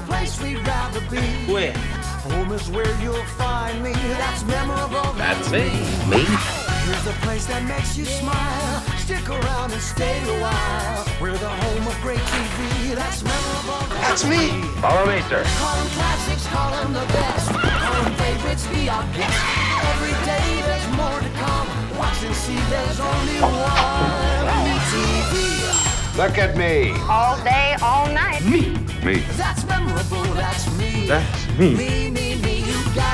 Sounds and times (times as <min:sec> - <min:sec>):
Jingle (music): 0:00.0 - 0:33.1.